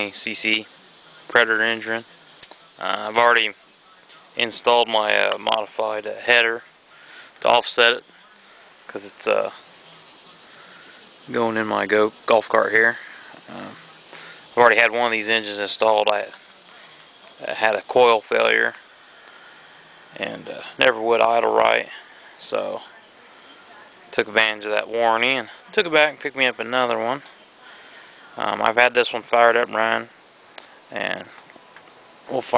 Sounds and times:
Speech: 0:00.0 - 0:06.7, 0:07.4 - 0:18.8, 0:20.2 - 0:27.4, 0:28.4 - 0:30.1, 0:30.9 - 0:31.4, 0:32.3 - 0:32.5.

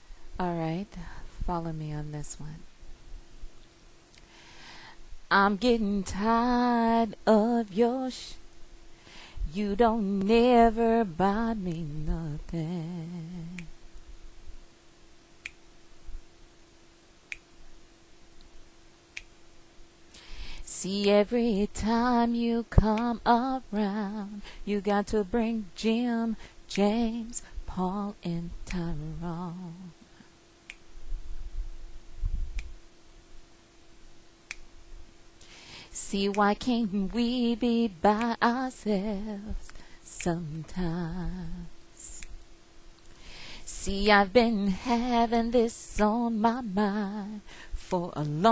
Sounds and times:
Female singing: 0:00.4 - 0:02.6, 0:05.3 - 0:08.4, 0:09.4 - 0:13.7, 0:20.7 - 0:30.0, 0:36.0 - 0:42.3, 0:43.7 - 0:48.5.

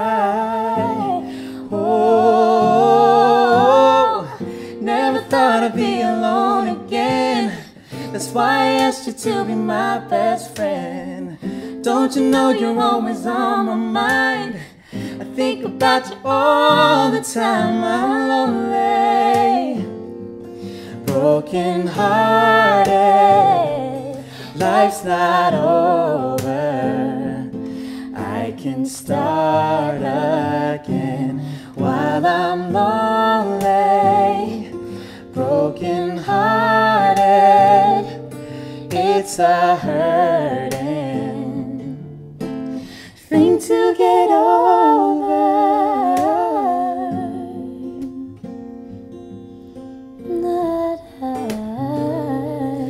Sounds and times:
Singing: 0:00.0 - 0:19.9, 0:21.1 - 0:34.7, 0:35.3 - 0:38.3, 0:38.9 - 0:42.0, 0:43.2 - 0:48.3, 0:50.3 - 0:52.9
Inside, small room: 0:00.0 - 0:52.9
Music: 0:00.0 - 0:52.9.

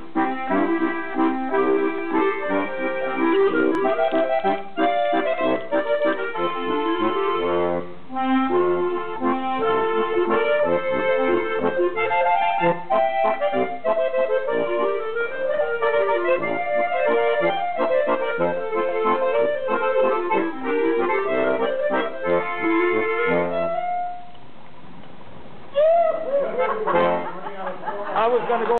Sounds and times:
Jazz: 0:00.0 - 0:24.3, 0:25.7 - 0:27.5
Speech: 0:27.4 - 0:28.7.

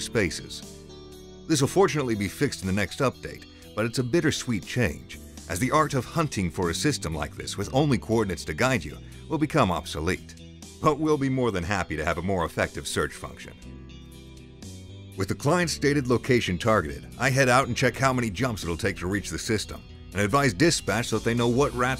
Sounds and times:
Speech: 0:00.0 - 0:00.6, 0:01.5 - 0:13.6, 0:15.2 - 0:21.9
Music: 0:00.0 - 0:21.9.

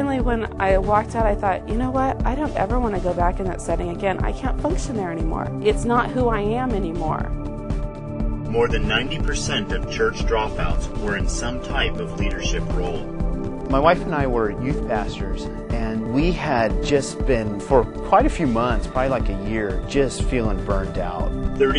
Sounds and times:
Speech: 0:00.0 - 0:07.3, 0:08.5 - 0:13.0, 0:13.7 - 0:21.7
Music: 0:00.0 - 0:21.7.

